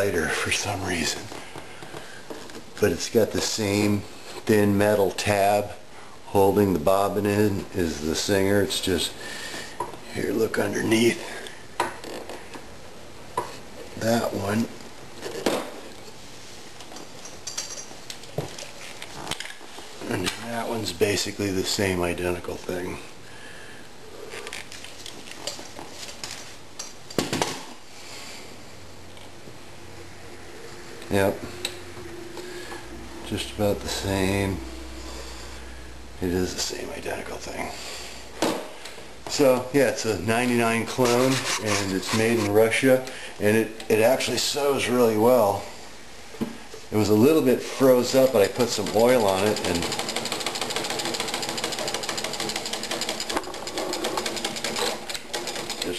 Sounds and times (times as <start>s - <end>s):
Speech: 0.0s - 1.3s, 2.8s - 9.2s, 10.1s - 11.4s, 14.0s - 14.8s, 20.0s - 23.1s, 31.1s - 31.5s, 33.2s - 34.7s, 36.2s - 37.8s, 39.3s - 45.7s, 46.9s - 50.0s
Sewing machine: 48.6s - 55.9s.